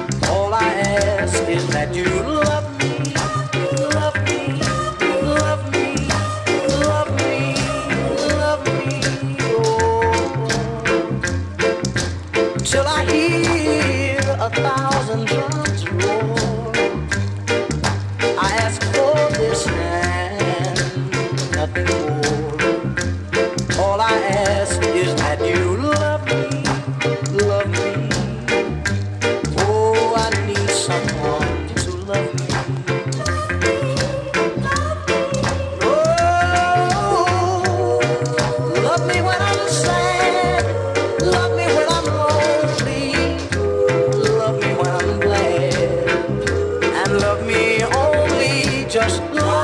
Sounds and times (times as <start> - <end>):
Music: 0.0 - 49.6.